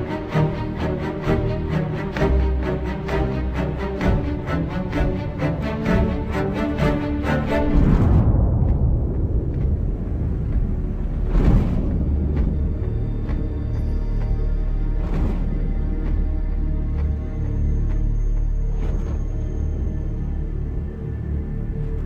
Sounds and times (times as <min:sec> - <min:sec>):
Music: 0:00.0 - 0:22.0.